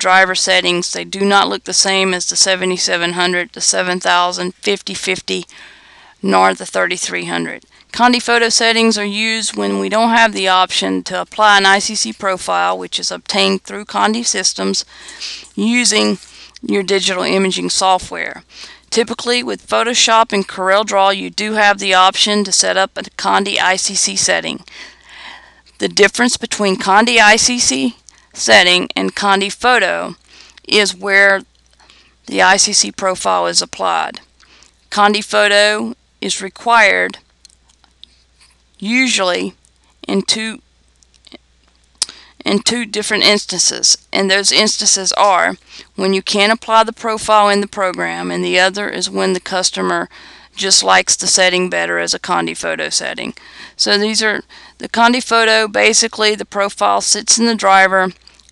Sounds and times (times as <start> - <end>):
Speech: 0.0 - 5.5, 6.2 - 24.7, 25.8 - 31.5, 32.3 - 34.3, 34.9 - 37.2, 38.8 - 40.6, 42.0 - 58.2.